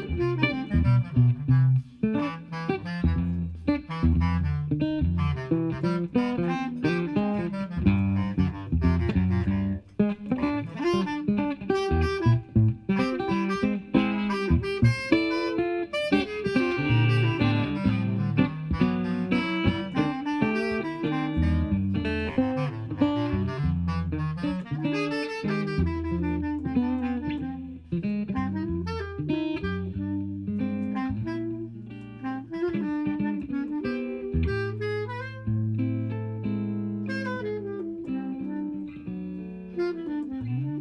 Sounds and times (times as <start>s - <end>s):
Guitar: 0.0s - 40.8s
Jazz: 0.0s - 40.8s
Saxophone: 0.0s - 40.8s.